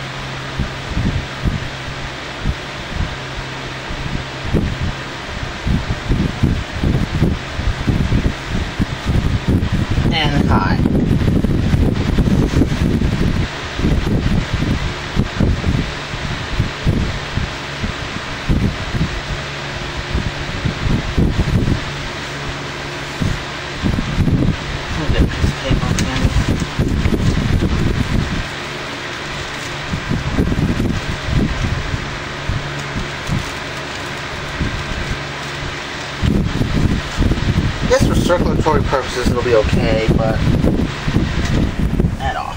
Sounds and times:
Mechanical fan: 0:00.0 - 0:42.5
Speech: 0:10.1 - 0:10.8, 0:24.9 - 0:26.4, 0:37.9 - 0:40.4, 0:42.2 - 0:42.5.

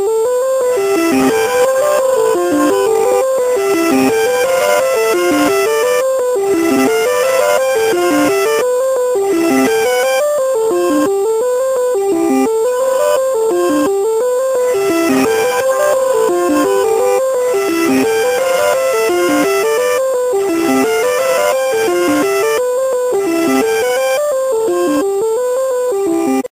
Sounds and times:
Music: 0:00.0 - 0:26.5.

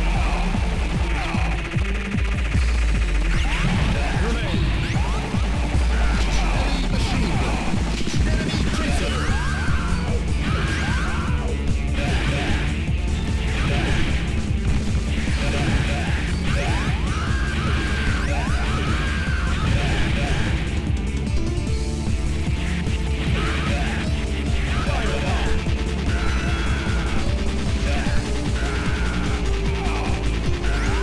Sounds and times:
Music: 0:00.0 - 0:31.0.

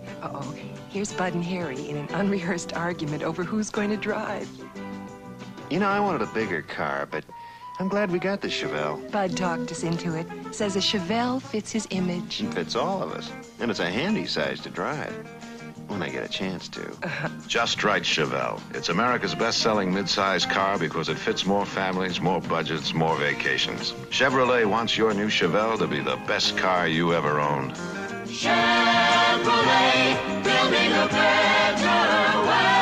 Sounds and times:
Music: 0:00.0 - 0:32.8
Speech: 0:05.7 - 0:15.2, 0:15.9 - 0:27.8.

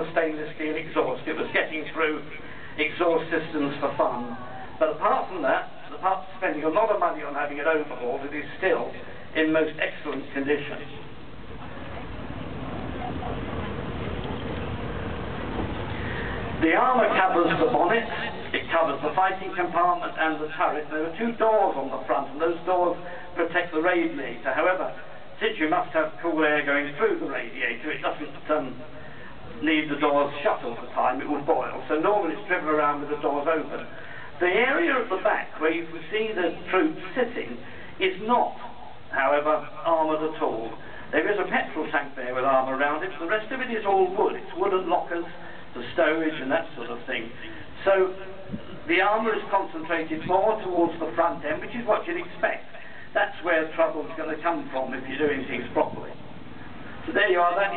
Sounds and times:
Speech: 0:00.0 - 0:11.0, 0:16.6 - 0:28.9, 0:29.5 - 0:56.2, 0:57.1 - 0:57.7
Vehicle: 0:11.4 - 0:16.7.

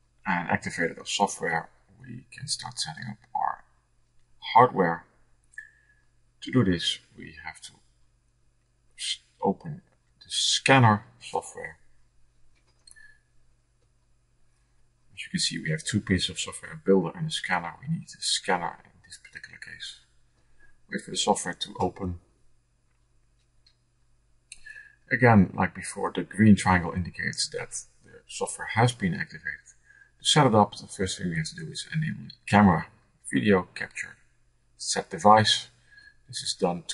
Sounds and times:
Speech: 0:00.3 - 0:03.6, 0:04.4 - 0:05.0, 0:06.4 - 0:07.7, 0:09.0 - 0:11.8, 0:15.2 - 0:20.0, 0:20.9 - 0:22.2, 0:24.6 - 0:34.2, 0:34.8 - 0:35.7, 0:36.3 - 0:36.9.

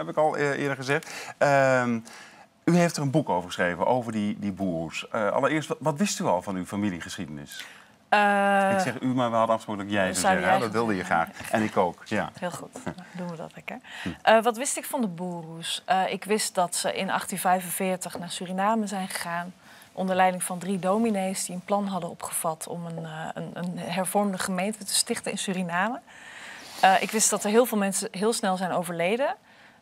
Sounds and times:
Speech: 0:08.4 - 0:12.3.

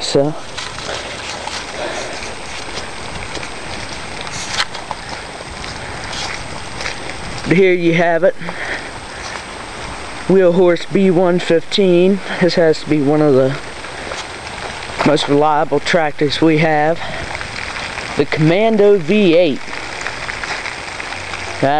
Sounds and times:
Speech: 0:00.0 - 0:00.4, 0:07.5 - 0:08.5, 0:10.3 - 0:13.6, 0:15.0 - 0:17.1, 0:18.2 - 0:19.6.

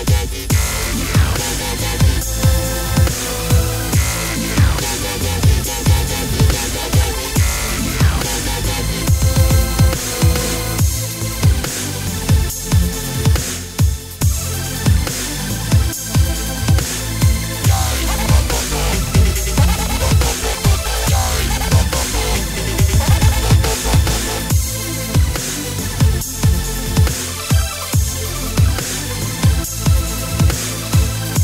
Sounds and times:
Dubstep: 0:00.0 - 0:31.4
Techno: 0:00.0 - 0:31.4
Trance music: 0:00.0 - 0:31.4.

